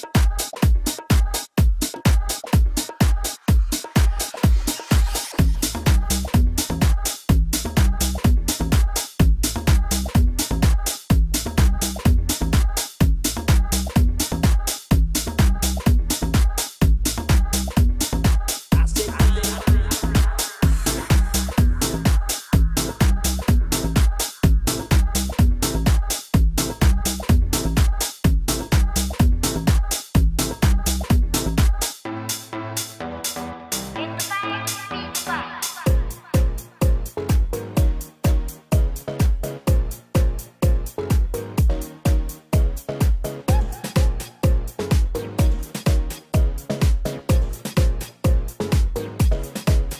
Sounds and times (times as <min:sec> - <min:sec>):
Dance music: 0:00.0 - 0:49.9.